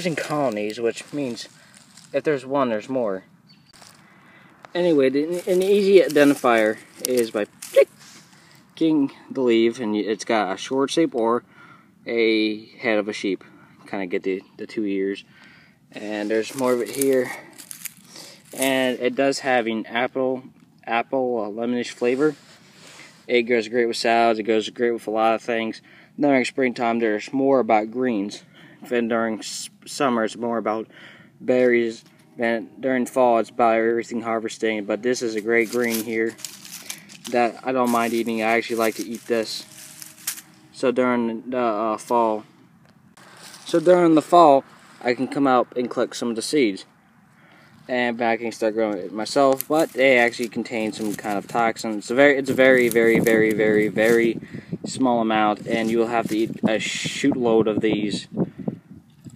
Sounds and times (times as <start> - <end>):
Speech: 0.0 - 3.3, 4.7 - 7.9, 8.8 - 11.4, 12.0 - 15.3, 15.9 - 17.5, 18.5 - 22.4, 23.3 - 36.4, 37.2 - 39.8, 40.7 - 42.5, 43.6 - 46.9, 47.9 - 58.3.